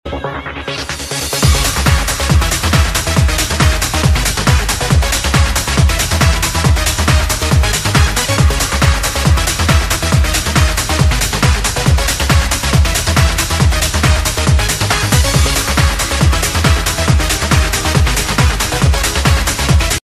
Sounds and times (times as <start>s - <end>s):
Music: 0.0s - 20.0s.